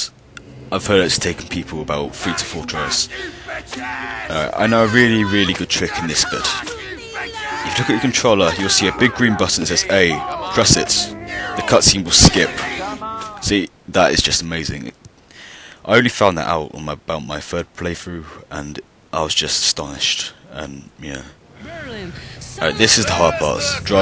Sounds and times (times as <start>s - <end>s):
Speech: 7.7s - 12.5s, 15.9s - 24.0s.